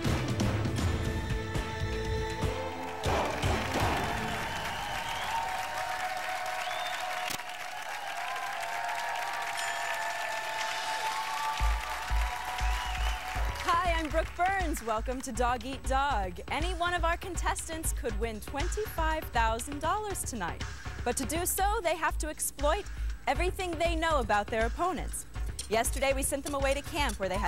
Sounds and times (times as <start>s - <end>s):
Music: 0.0s - 7.0s, 8.3s - 27.4s
Speech: 13.7s - 27.4s.